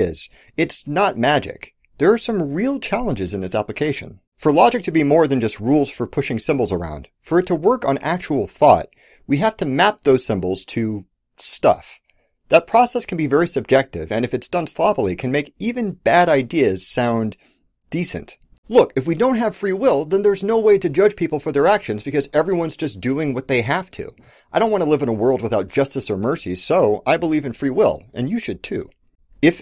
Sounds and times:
Speech: 0:00.0 - 0:29.6.

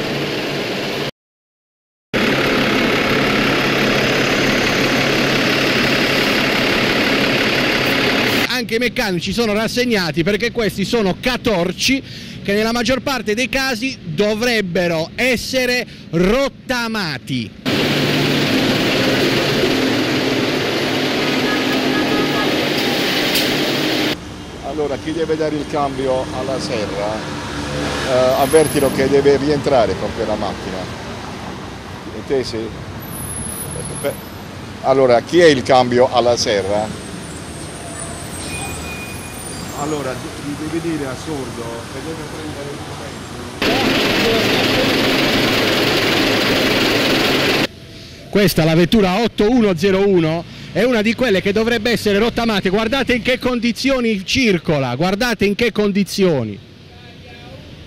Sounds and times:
Vehicle: 0:00.0 - 0:01.1, 0:02.2 - 0:57.8
Speech: 0:08.5 - 0:17.6, 0:24.6 - 0:27.2, 0:28.1 - 0:30.9, 0:34.8 - 0:36.9, 0:48.3 - 0:57.7.

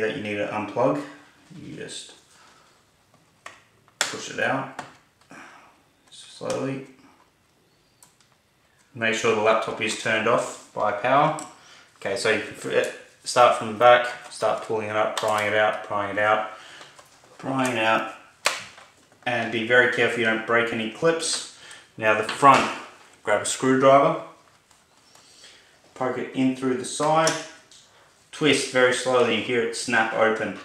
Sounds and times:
Speech: 0:00.0 - 0:02.2, 0:04.1 - 0:04.8, 0:06.1 - 0:07.0, 0:09.0 - 0:16.6, 0:17.4 - 0:18.2, 0:19.2 - 0:24.4, 0:26.0 - 0:27.6, 0:28.3 - 0:30.6
Inside, small room: 0:00.0 - 0:30.6.

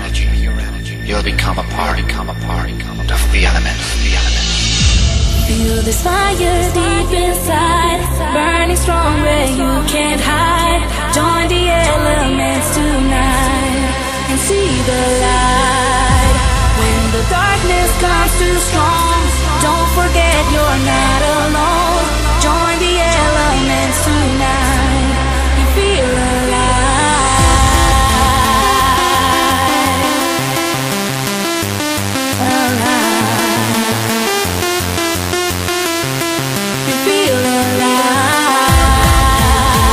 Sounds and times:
Techno: 0:00.0 - 0:39.9.

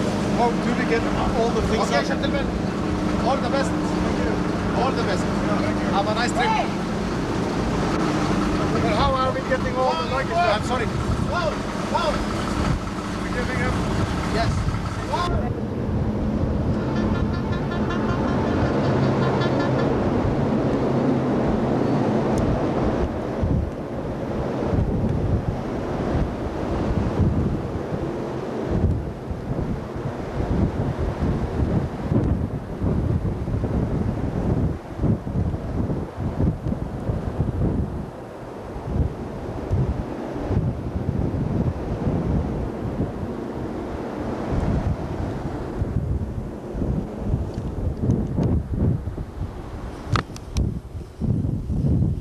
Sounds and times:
Wind noise (microphone): 0:00.0 - 0:52.2.

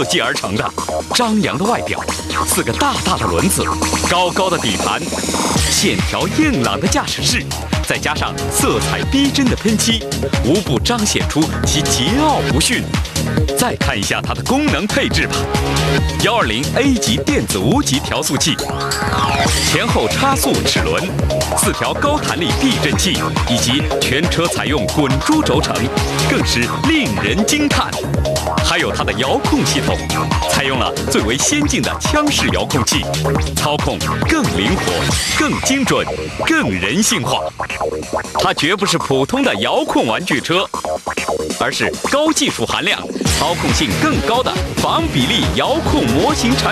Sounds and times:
Speech: 0:00.0 - 0:12.9, 0:13.5 - 0:15.5, 0:16.2 - 0:18.7, 0:19.6 - 0:28.0, 0:28.6 - 0:37.5, 0:38.4 - 0:40.7, 0:41.6 - 0:46.7
Music: 0:00.0 - 0:46.7.

